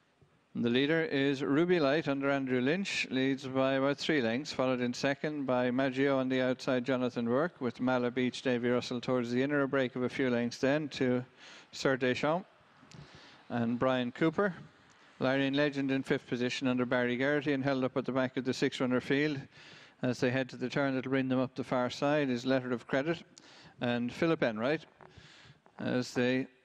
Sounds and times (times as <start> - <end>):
Speech: 0.6 - 12.5, 13.5 - 24.9, 25.8 - 26.6.